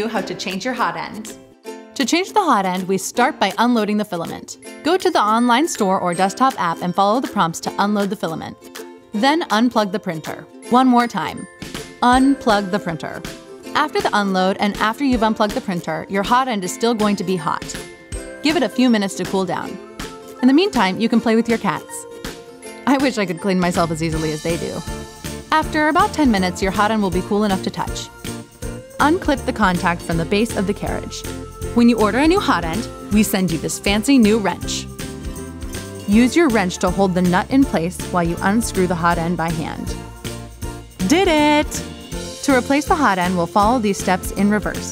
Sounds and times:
Speech: 0.0s - 1.4s, 2.0s - 8.6s, 9.2s - 11.4s, 12.0s - 13.2s, 13.8s - 17.8s, 18.5s - 19.8s, 20.4s - 22.0s, 22.9s - 24.8s, 25.6s - 28.1s, 29.0s - 31.2s, 31.8s - 34.9s, 36.1s - 39.9s, 41.0s - 41.8s, 42.5s - 44.9s
Music: 0.0s - 44.9s.

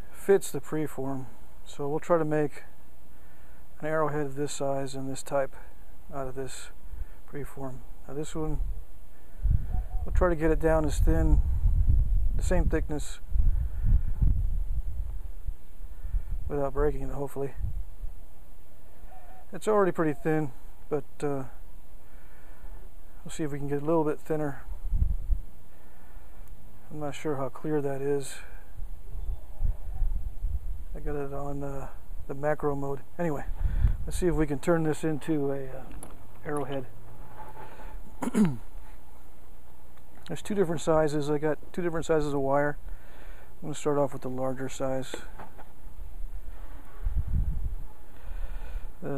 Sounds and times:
Speech: 0.2s - 2.7s, 3.8s - 8.6s, 10.1s - 11.4s, 12.4s - 13.2s, 16.5s - 17.6s, 19.5s - 21.6s, 23.2s - 24.7s, 26.9s - 28.6s, 31.0s - 33.5s, 34.1s - 36.9s, 40.3s - 42.8s, 43.6s - 45.3s.

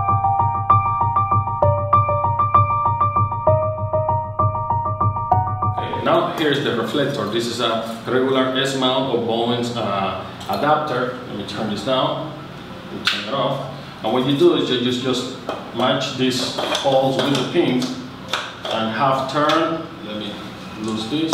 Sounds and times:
Speech: 5.8s - 18.1s, 18.7s - 21.3s.

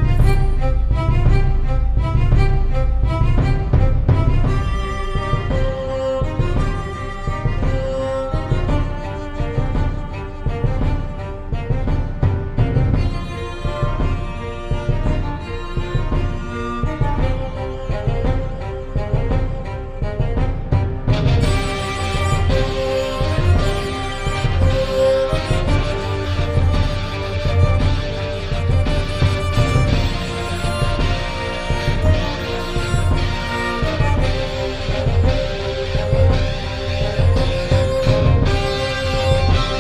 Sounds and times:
Violin, fiddle: 0.0s - 39.8s.

